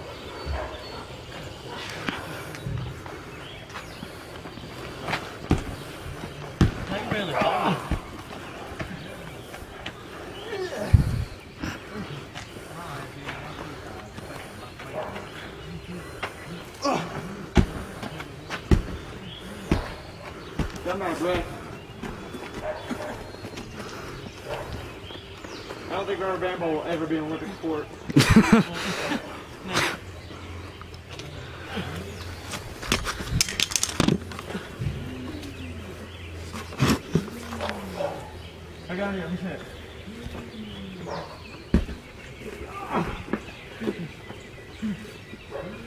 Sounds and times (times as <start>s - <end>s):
Bird: 0.0s - 45.8s.